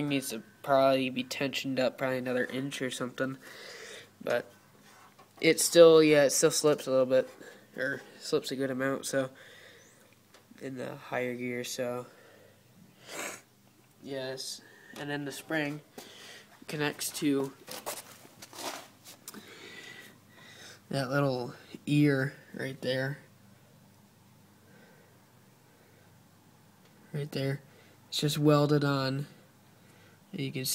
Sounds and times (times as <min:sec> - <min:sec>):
Speech: 0:00.0 - 0:03.4, 0:04.2 - 0:04.5, 0:05.4 - 0:09.4, 0:10.6 - 0:12.1, 0:14.0 - 0:15.9, 0:16.7 - 0:17.6, 0:20.9 - 0:23.3, 0:27.1 - 0:29.4, 0:30.3 - 0:30.7.